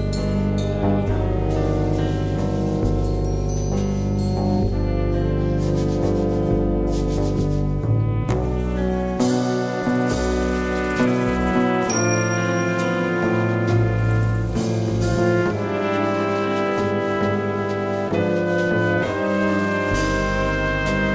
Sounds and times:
Orchestra: 0:00.0 - 0:21.1.

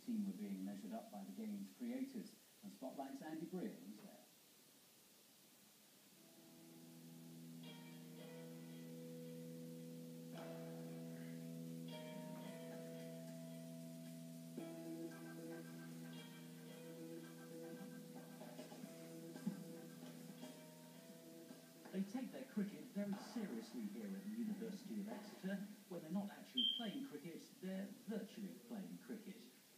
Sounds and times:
Music: 0:06.2 - 0:25.4.

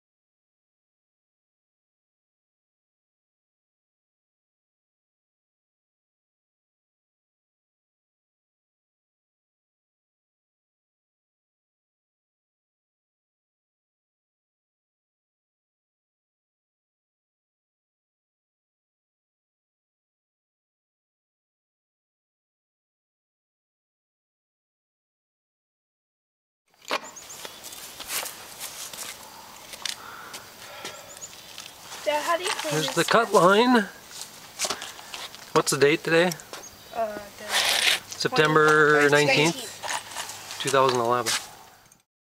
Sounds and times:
Speech: 0:32.0 - 0:34.0, 0:38.2 - 0:39.8, 0:40.6 - 0:41.4.

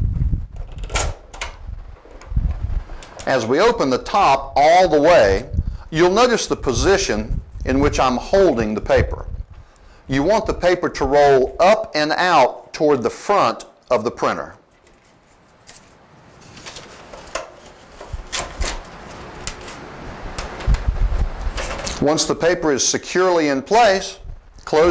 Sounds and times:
Speech: 0:03.3 - 0:09.3, 0:10.1 - 0:14.6, 0:22.0 - 0:24.9.

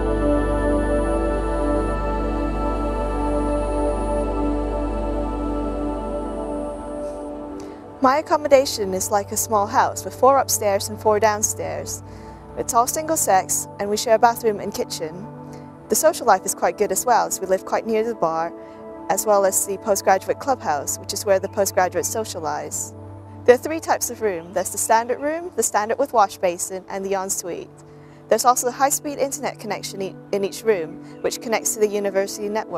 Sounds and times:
Music: 0:00.0 - 0:32.7
Speech: 0:08.0 - 0:12.0, 0:12.6 - 0:15.2, 0:15.9 - 0:18.5, 0:19.1 - 0:22.9, 0:23.5 - 0:27.7, 0:28.3 - 0:32.7.

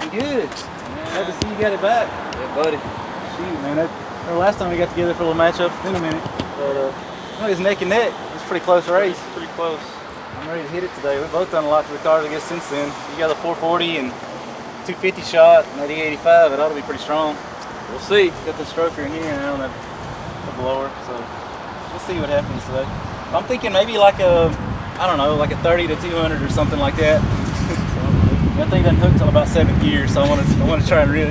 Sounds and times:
Speech: 0:00.0 - 0:14.2, 0:14.8 - 0:19.7, 0:20.5 - 0:21.3, 0:22.0 - 0:28.0, 0:28.6 - 0:31.3.

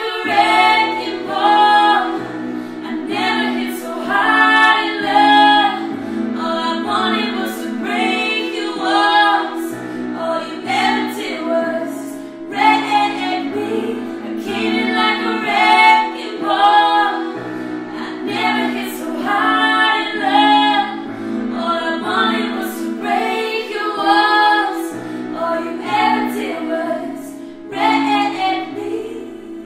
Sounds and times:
Keyboard (musical): 0:00.0 - 0:29.6.

